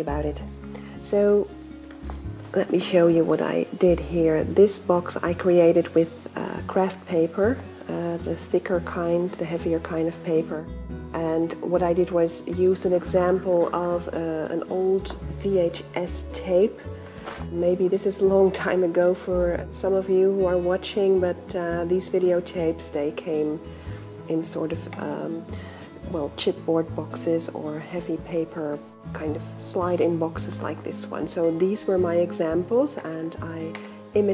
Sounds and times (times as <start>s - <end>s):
Speech: 0.0s - 1.5s, 2.5s - 10.6s, 11.2s - 16.8s, 17.5s - 23.7s, 24.3s - 34.3s
Music: 0.0s - 34.3s.